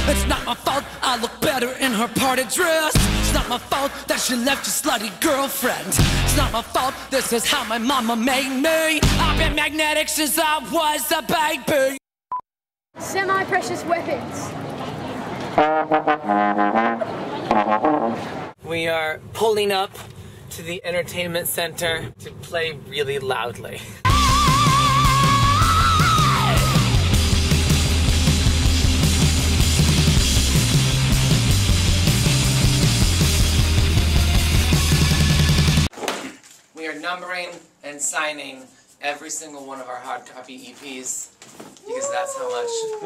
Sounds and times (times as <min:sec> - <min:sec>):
Music: 0:00.0 - 0:11.4, 0:24.1 - 0:35.9
Outside, urban or manmade: 0:12.9 - 0:36.0.